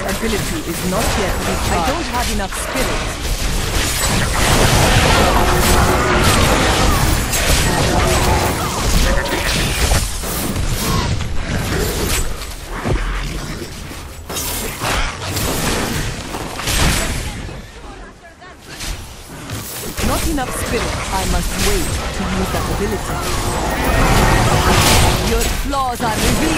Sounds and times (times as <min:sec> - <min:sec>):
Speech: 0:00.0 - 0:03.0, 0:20.0 - 0:23.1, 0:24.7 - 0:26.5.